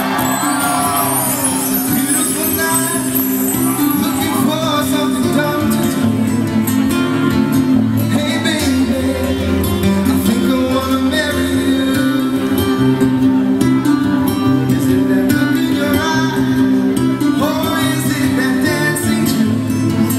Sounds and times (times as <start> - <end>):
Music: 0.0 - 20.1
Male singing: 1.9 - 7.2, 8.0 - 13.1, 13.7 - 20.1.